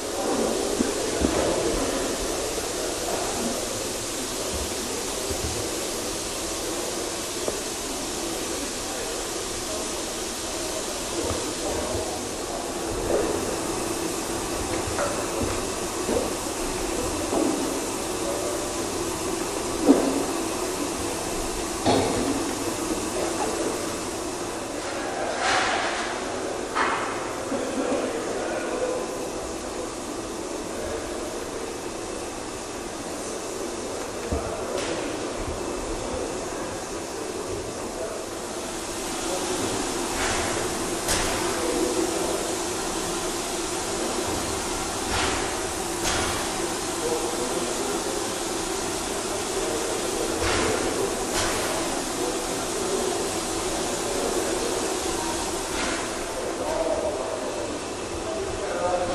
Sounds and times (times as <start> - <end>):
Inside, large room or hall: 0.0 - 59.1.